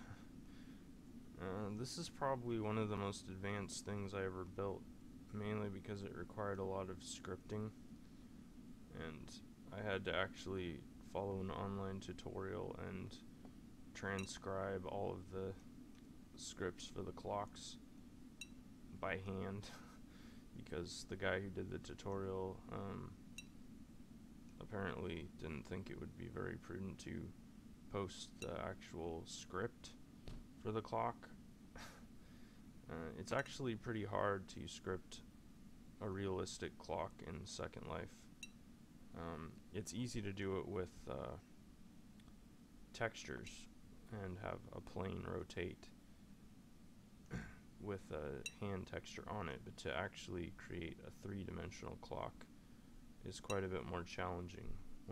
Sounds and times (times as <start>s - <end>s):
Speech: 1.4s - 7.8s, 8.9s - 13.3s, 14.0s - 15.6s, 16.4s - 17.8s, 18.9s - 19.9s, 20.6s - 23.2s, 24.6s - 30.0s, 30.6s - 31.4s, 32.9s - 35.3s, 36.0s - 38.3s, 39.2s - 41.4s, 42.9s - 46.0s, 47.8s - 52.5s, 53.2s - 55.1s.